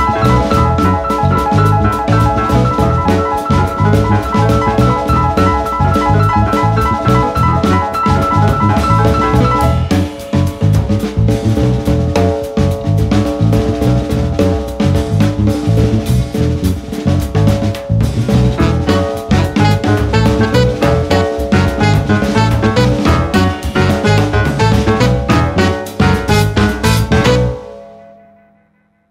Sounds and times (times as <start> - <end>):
Drum kit: 0.0 - 28.0.